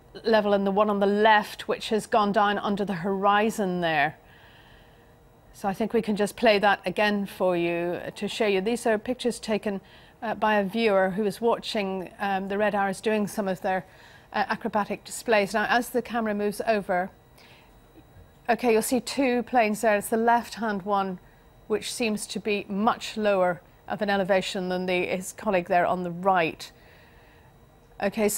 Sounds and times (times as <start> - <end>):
Speech: 0.2 - 4.2, 5.6 - 17.2, 18.5 - 26.7, 28.0 - 28.3.